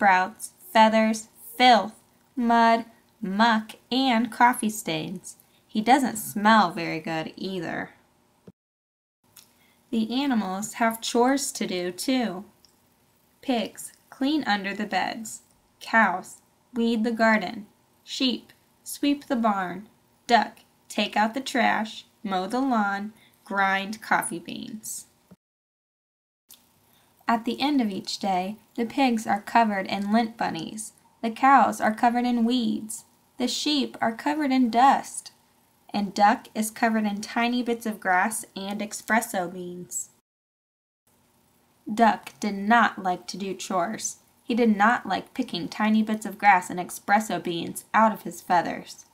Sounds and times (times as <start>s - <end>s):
Speech: 0.0s - 8.0s, 10.0s - 12.5s, 13.4s - 25.1s, 27.3s - 40.2s, 41.9s - 49.1s.